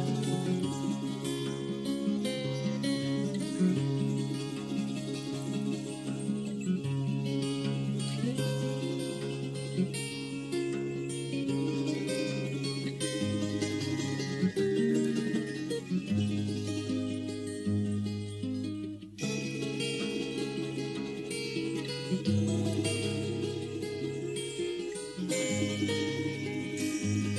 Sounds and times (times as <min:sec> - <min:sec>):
Music: 0:00.0 - 0:27.3.